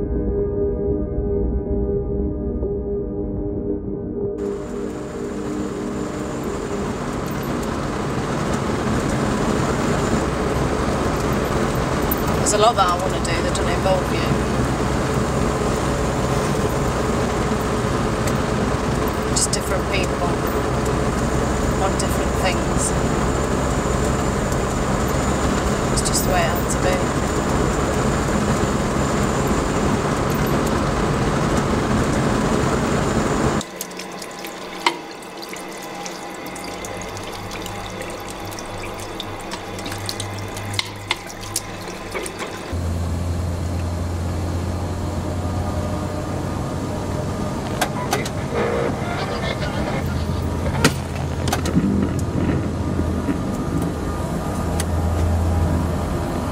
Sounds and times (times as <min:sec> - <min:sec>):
Water: 0:04.4 - 0:48.6
Sink (filling or washing): 0:33.6 - 0:42.8
Water tap, faucet: 0:33.6 - 0:42.8.